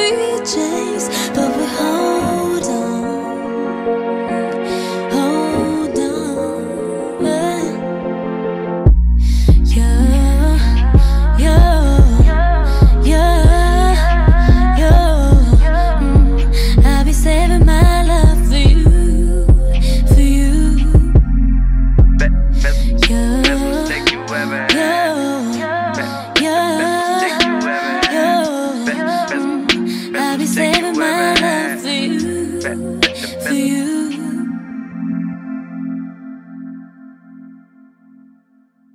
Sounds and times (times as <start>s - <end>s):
Synthesizer: 0.0s - 38.9s.